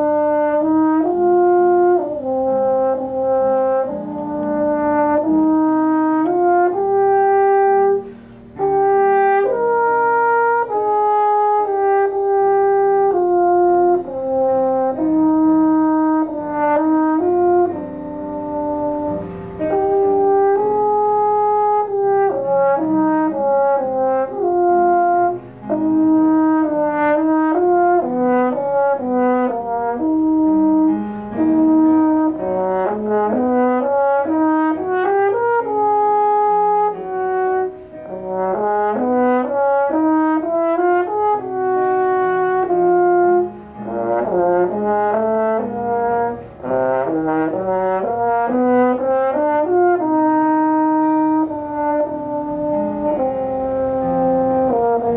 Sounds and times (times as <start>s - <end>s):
Trumpet: 0.0s - 55.1s
Wind instrument, woodwind instrument: 0.0s - 55.1s.